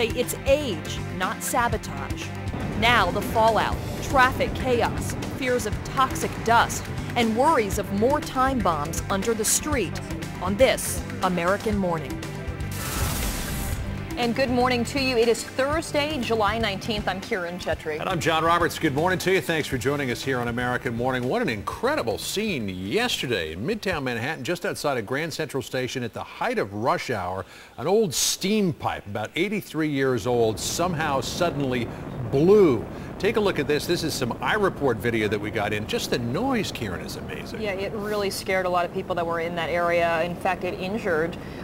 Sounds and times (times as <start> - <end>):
Music: 0.0 - 23.4
Speech: 14.2 - 41.4.